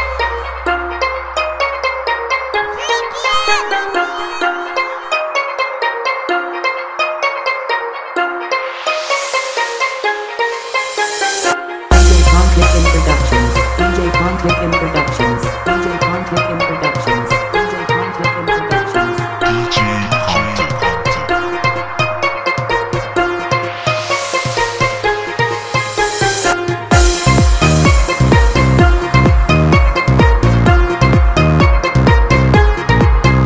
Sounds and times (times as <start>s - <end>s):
Music: 0.0s - 33.4s.